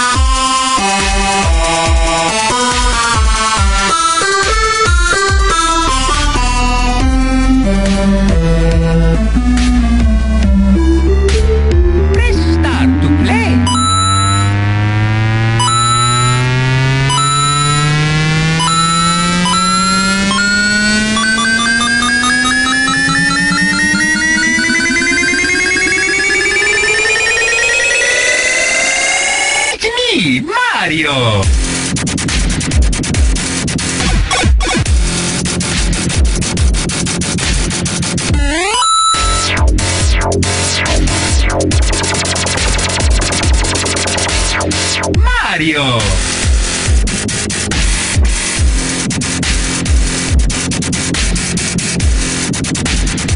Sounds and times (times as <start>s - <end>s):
Dubstep: 0.0s - 27.3s, 31.4s - 53.3s
Speech: 12.2s - 13.7s, 29.8s - 31.5s, 45.2s - 46.3s.